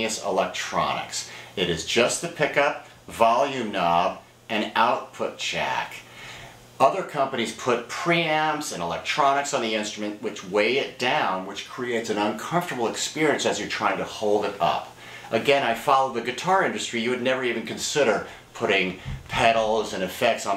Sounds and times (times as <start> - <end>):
Speech: 0.0 - 6.1, 6.8 - 20.5.